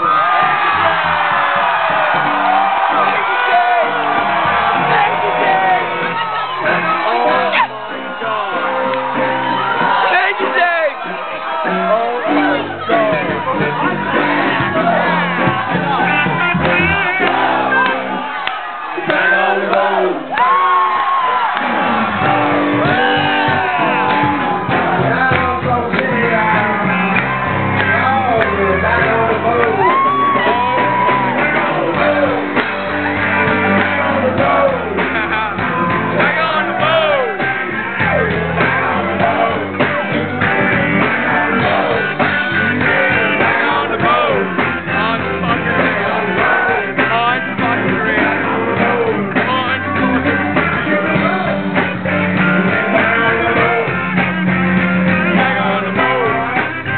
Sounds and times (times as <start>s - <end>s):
Music: 0.0s - 56.9s.